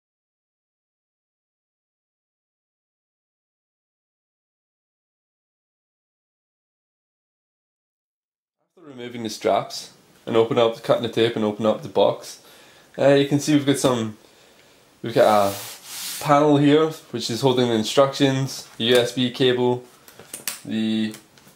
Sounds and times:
Speech: 8.8s - 14.2s, 15.0s - 19.9s, 20.6s - 21.2s.

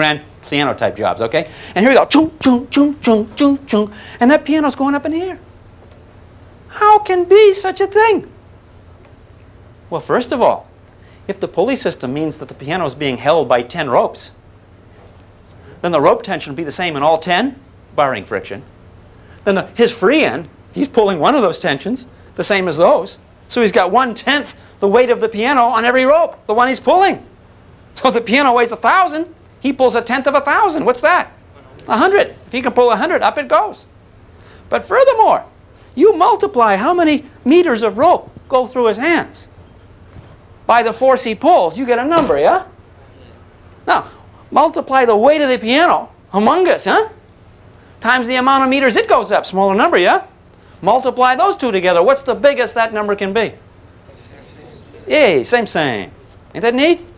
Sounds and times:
Speech: 0.0s - 5.4s, 6.7s - 8.4s, 9.9s - 10.7s, 11.3s - 14.4s, 15.8s - 18.7s, 19.4s - 27.3s, 28.0s - 33.9s, 34.7s - 39.5s, 40.7s - 47.2s, 48.0s - 53.6s, 54.2s - 57.1s.

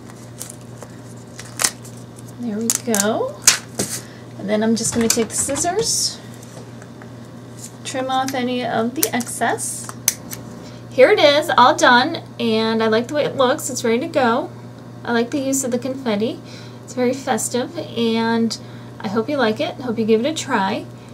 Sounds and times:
Speech: 11.0s - 14.5s, 15.1s - 20.9s.

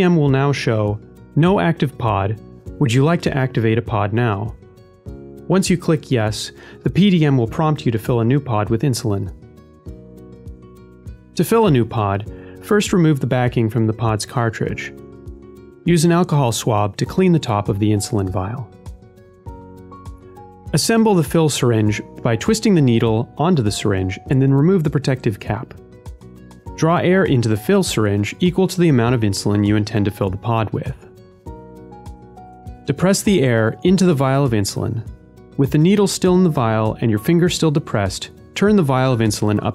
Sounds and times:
Speech: 0.0s - 4.6s, 5.5s - 9.3s, 11.4s - 15.0s, 15.9s - 18.7s, 20.7s - 25.8s, 26.8s - 31.0s, 32.9s - 39.7s
Music: 0.0s - 39.7s.

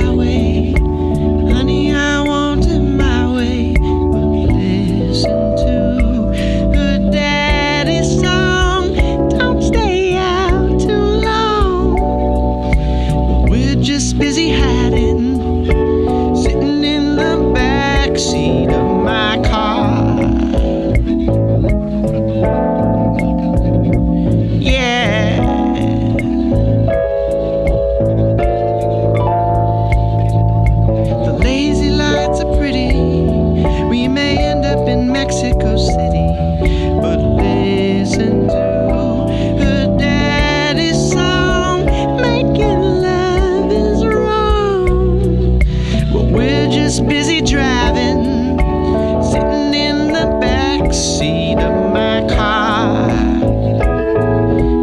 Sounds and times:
Music: 0.0s - 54.8s.

